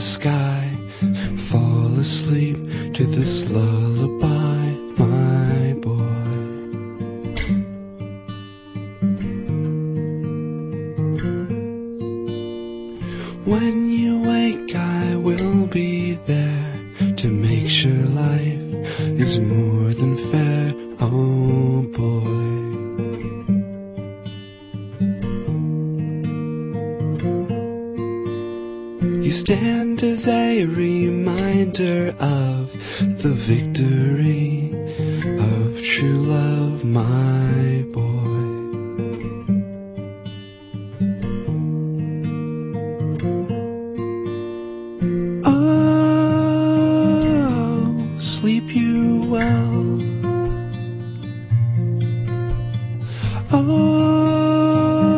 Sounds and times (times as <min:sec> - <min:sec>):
Music: 0:00.0 - 0:55.1.